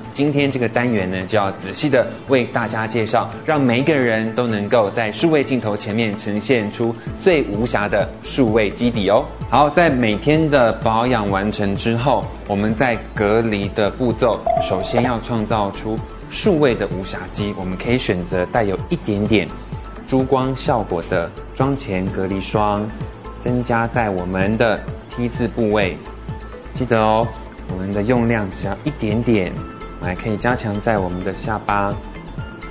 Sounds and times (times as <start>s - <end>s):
Music: 0.0s - 32.7s
Speech: 0.2s - 26.1s, 26.8s - 32.0s.